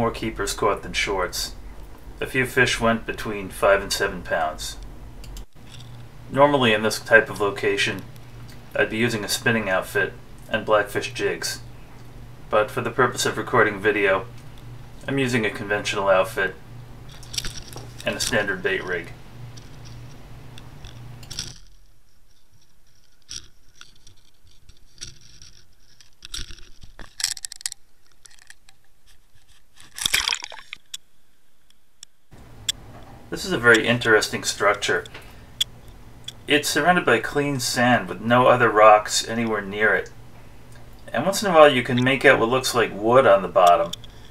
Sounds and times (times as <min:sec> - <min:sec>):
Speech: 0:00.0 - 0:01.6, 0:02.2 - 0:04.8, 0:06.3 - 0:08.1, 0:08.8 - 0:11.7, 0:12.5 - 0:14.3, 0:15.1 - 0:16.6, 0:18.0 - 0:19.2, 0:33.3 - 0:35.1, 0:36.5 - 0:40.2, 0:41.1 - 0:44.0.